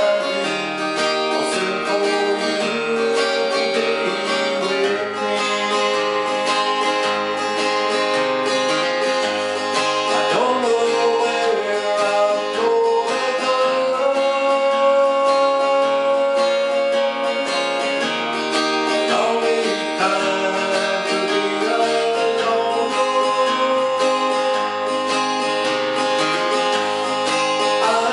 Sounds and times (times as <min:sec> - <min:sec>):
Male singing: 0:00.0 - 0:06.3, 0:10.0 - 0:17.9, 0:18.9 - 0:24.8, 0:27.6 - 0:28.1
Music: 0:00.0 - 0:28.1.